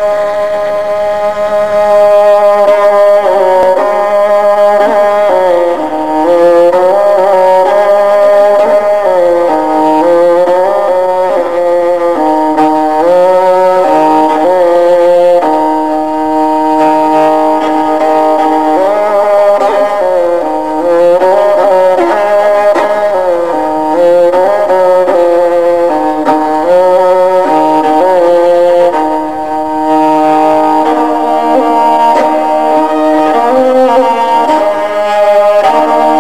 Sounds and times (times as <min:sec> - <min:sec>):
Violin, fiddle: 0:00.0 - 0:36.2.